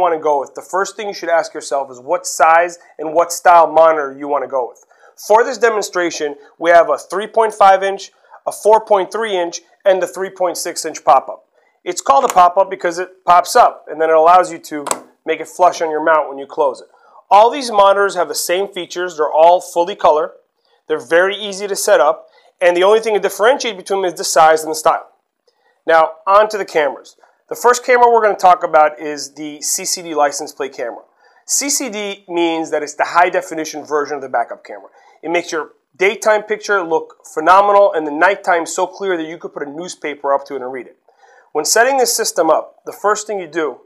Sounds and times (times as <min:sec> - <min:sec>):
Speech: 0:00.0 - 0:25.2, 0:25.9 - 0:43.8.